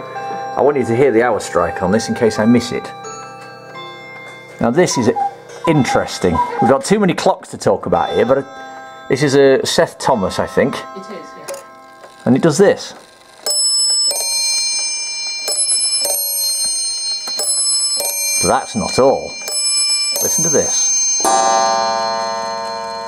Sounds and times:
Speech: 0.6s - 3.0s, 4.6s - 8.5s, 18.4s - 19.4s, 20.3s - 20.8s.

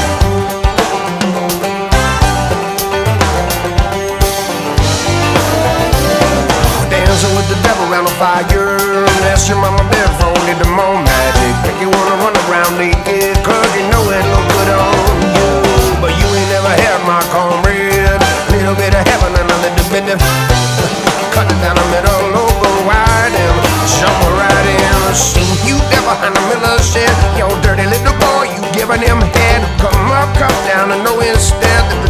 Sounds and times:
Music: 0.0s - 32.0s.

